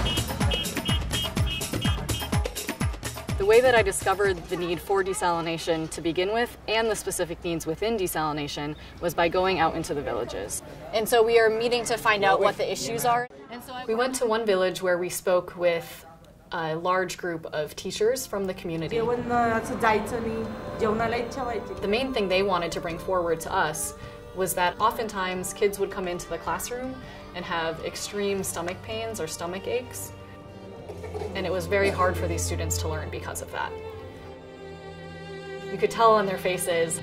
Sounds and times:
Speech: 3.4 - 30.1.

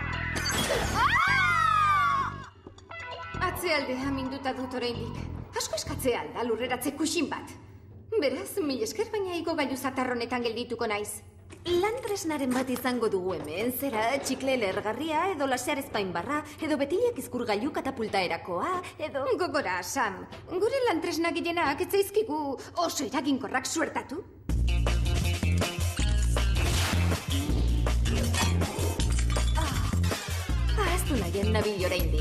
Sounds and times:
Music: 0.0 - 32.2
Speech: 3.4 - 24.3, 30.8 - 32.2.

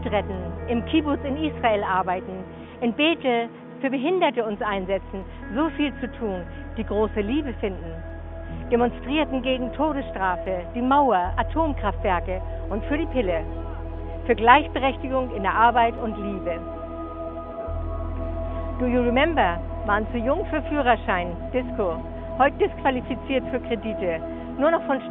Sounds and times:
Speech: 0.0 - 8.0, 8.7 - 13.5, 14.3 - 16.6, 18.8 - 25.1
Music: 0.0 - 25.1.

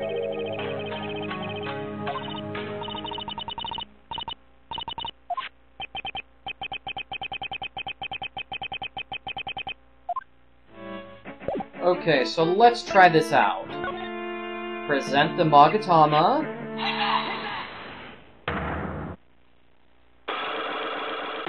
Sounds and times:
Music: 0.0 - 3.8, 10.7 - 17.4
Speech: 11.8 - 13.7, 14.9 - 16.5.

